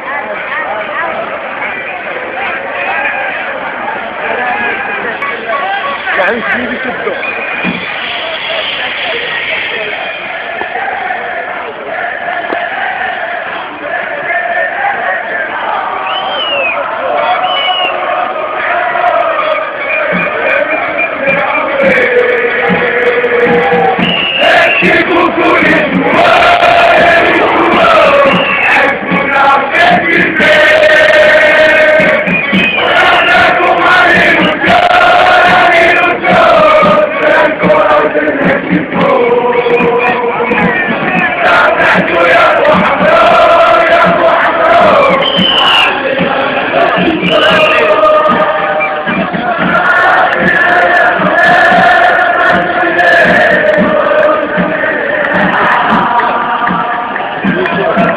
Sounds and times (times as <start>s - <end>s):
Music: 4.3s - 11.1s, 11.9s - 58.1s.